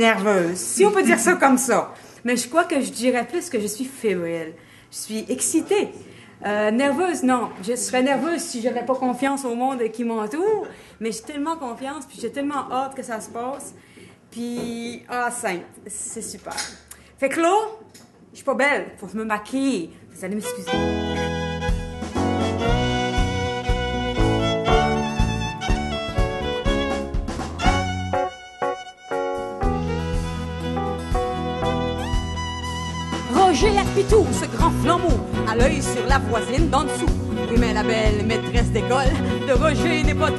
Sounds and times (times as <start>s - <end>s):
Speech: 0.0s - 13.8s, 14.4s - 20.8s, 33.3s - 40.3s
Music: 20.4s - 40.3s.